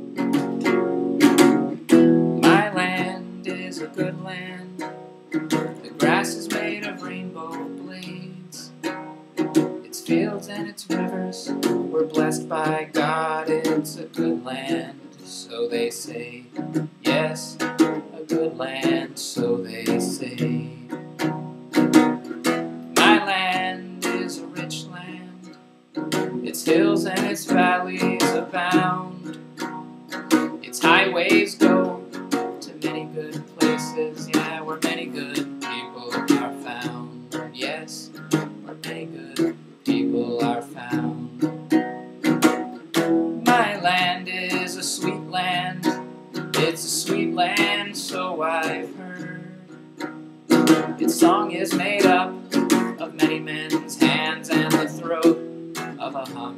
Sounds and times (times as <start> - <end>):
Music: 0.0 - 56.5
Male singing: 2.4 - 4.9, 5.8 - 8.9, 9.8 - 21.0, 23.0 - 25.6, 26.4 - 29.4, 30.4 - 41.6, 43.4 - 49.8, 50.8 - 56.5.